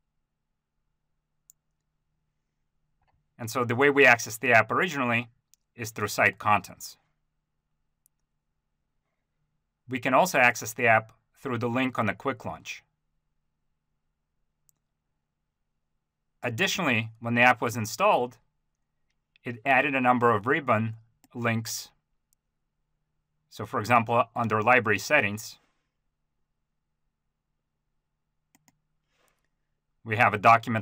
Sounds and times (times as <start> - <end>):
Speech: 3.4 - 7.0, 9.9 - 12.9, 16.4 - 18.4, 19.4 - 22.0, 23.5 - 25.6, 30.0 - 30.8.